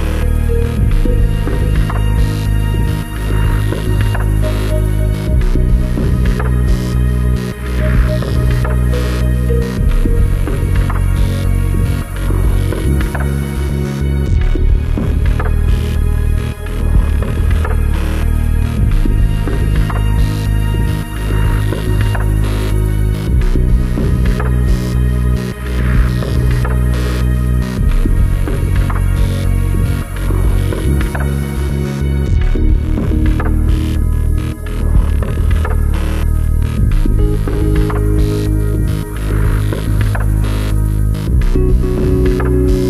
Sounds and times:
Music: 0:00.0 - 0:42.8.

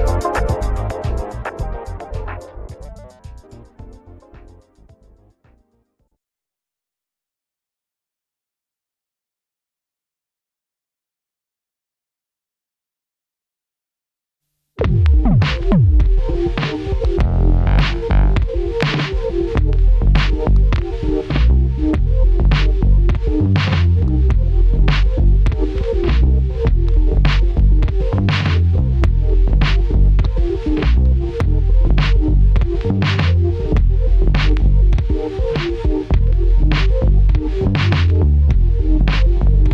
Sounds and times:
Drum machine: 0:00.0 - 0:04.6, 0:14.8 - 0:39.7.

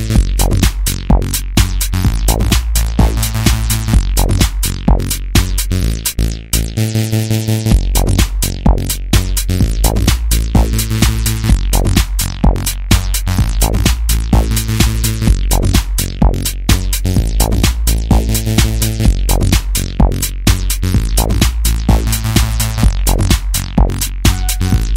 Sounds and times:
House music: 0:00.0 - 0:24.9.

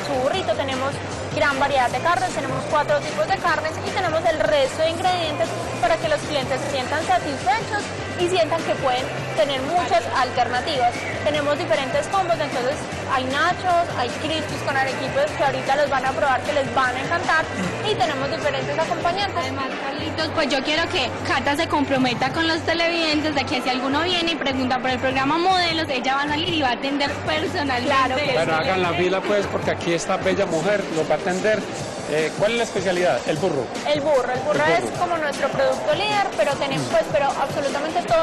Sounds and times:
Music: 0:00.0 - 0:38.2.

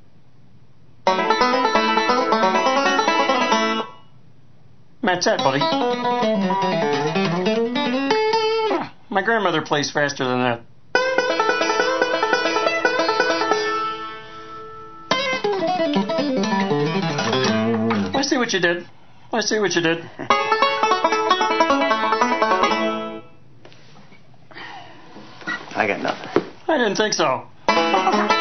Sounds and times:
Music: 0:01.1 - 0:04.0, 0:05.4 - 0:08.9, 0:11.0 - 0:18.2, 0:20.3 - 0:23.3, 0:27.7 - 0:28.4
Speech: 0:05.0 - 0:05.8, 0:09.1 - 0:10.7, 0:18.2 - 0:20.1, 0:25.8 - 0:27.5.

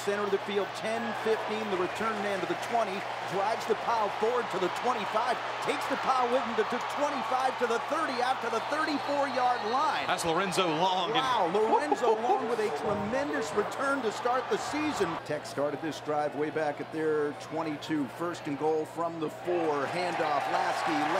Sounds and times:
Speech: 0:00.0 - 0:21.2.

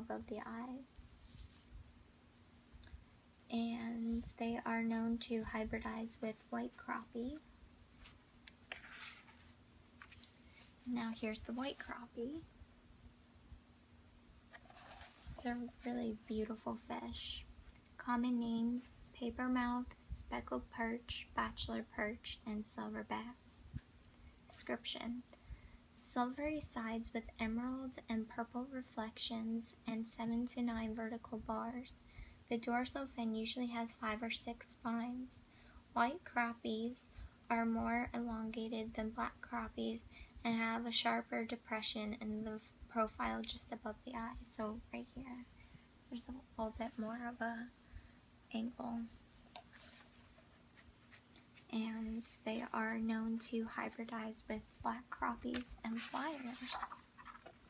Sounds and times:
Speech: 0:00.0 - 0:00.9, 0:03.5 - 0:07.5, 0:10.9 - 0:12.5, 0:15.4 - 0:23.7, 0:24.5 - 0:25.3, 0:26.0 - 0:35.4, 0:36.0 - 0:45.5, 0:46.1 - 0:47.7, 0:48.5 - 0:49.2, 0:51.7 - 0:57.1
Inside, small room: 0:00.0 - 0:57.7.

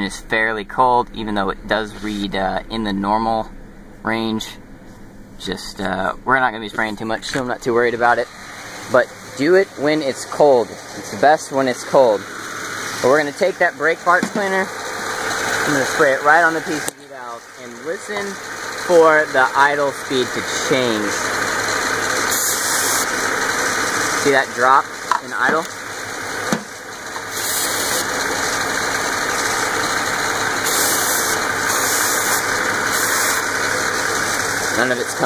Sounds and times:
Speech: 0:00.0 - 0:04.6, 0:05.4 - 0:08.3, 0:08.9 - 0:12.2, 0:13.0 - 0:14.7, 0:15.6 - 0:21.3, 0:24.2 - 0:25.7, 0:34.8 - 0:35.2
Car: 0:00.0 - 0:35.2
Idling: 0:00.0 - 0:35.2.

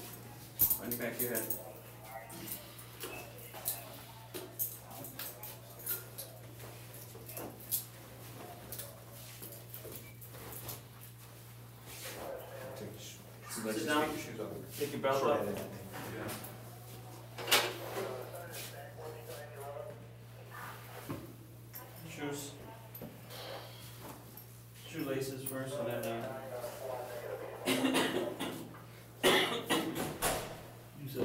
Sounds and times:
Speech: 0:12.0 - 0:20.8, 0:24.8 - 0:28.6, 0:31.0 - 0:31.2.

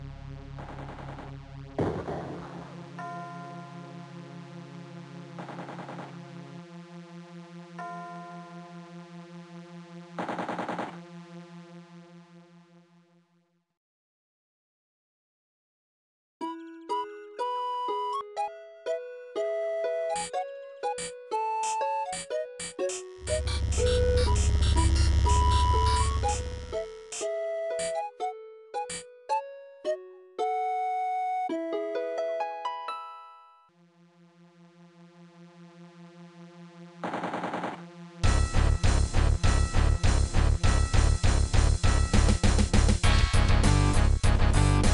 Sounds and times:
Music: 0:00.0 - 0:13.8, 0:16.4 - 0:44.9.

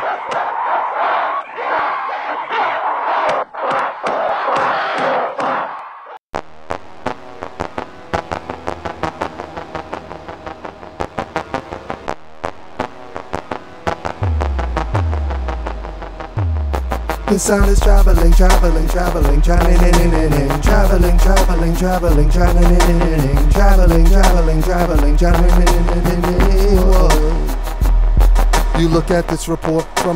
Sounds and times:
Music: 0:06.6 - 0:30.1.

